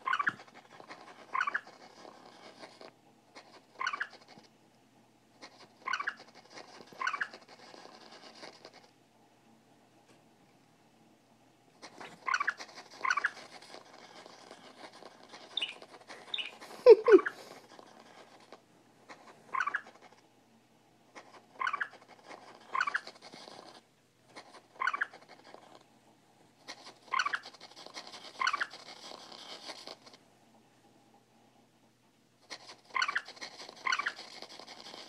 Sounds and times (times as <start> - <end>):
Mouse: 0.0 - 4.5, 5.4 - 8.9, 11.8 - 20.2, 21.1 - 25.8, 26.6 - 30.2, 32.4 - 35.0.